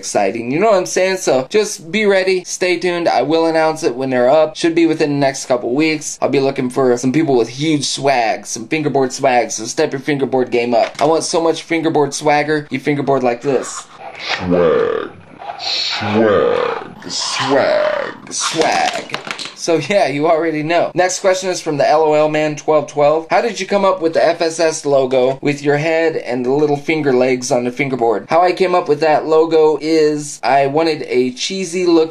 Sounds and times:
Inside, small room: 0:00.0 - 0:32.1
Speech: 0:00.0 - 0:32.1.

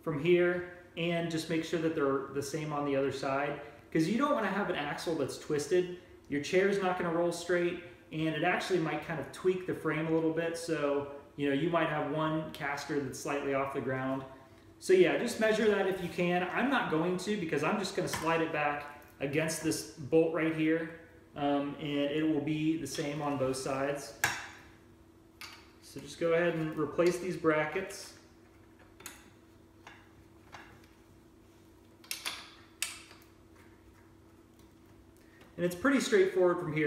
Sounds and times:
Speech: 0:00.0 - 0:24.2, 0:25.8 - 0:28.2, 0:35.6 - 0:36.8.

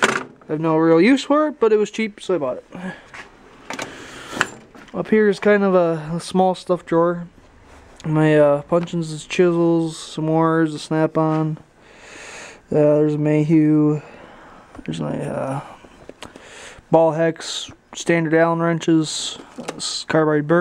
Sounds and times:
Speech: 0:00.5 - 0:03.0, 0:04.9 - 0:07.3, 0:08.0 - 0:11.6, 0:12.7 - 0:14.1, 0:14.8 - 0:15.8, 0:16.9 - 0:20.6.

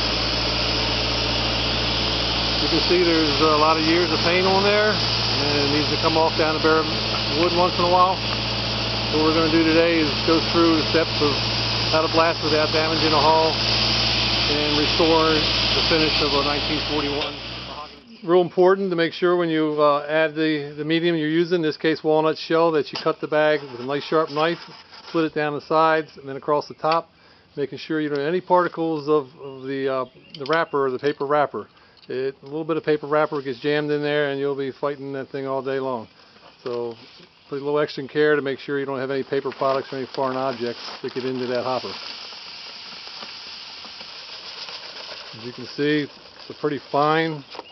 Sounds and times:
Speech: 0:02.6 - 0:08.2, 0:09.1 - 0:13.6, 0:14.5 - 0:36.1, 0:36.7 - 0:42.0, 0:45.3 - 0:47.5.

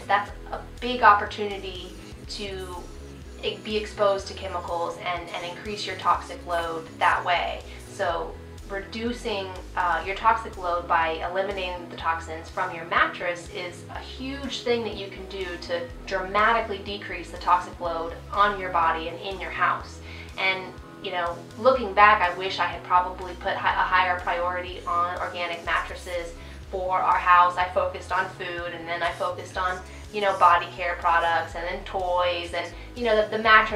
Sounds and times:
Inside, small room: 0:00.0 - 0:33.7
Music: 0:00.0 - 0:33.7
Speech: 0:00.0 - 0:33.7.

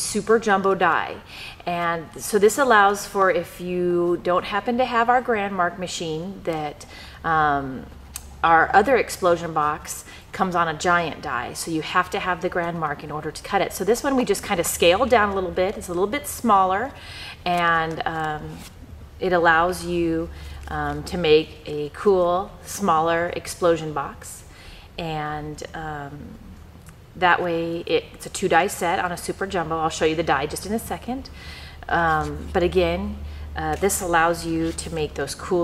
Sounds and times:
Speech: 0:00.0 - 0:07.9, 0:08.5 - 0:24.4, 0:25.0 - 0:26.4, 0:27.2 - 0:31.3, 0:31.9 - 0:35.6.

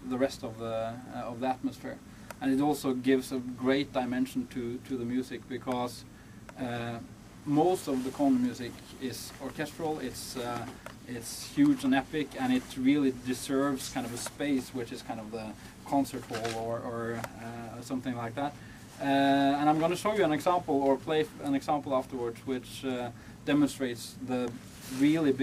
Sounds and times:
Speech: 0:00.0 - 0:25.4.

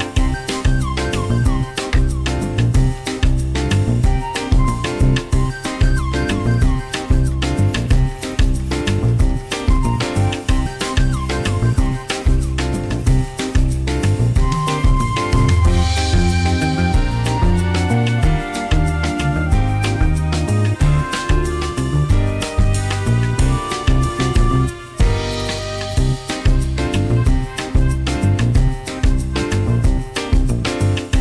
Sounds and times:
Music: 0:00.0 - 0:31.2.

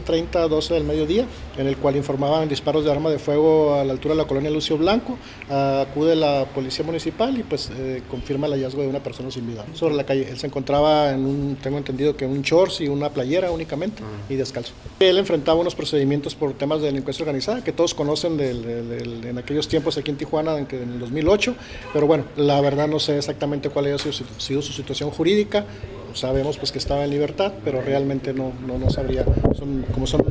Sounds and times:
Speech: 0:00.0 - 0:30.3.

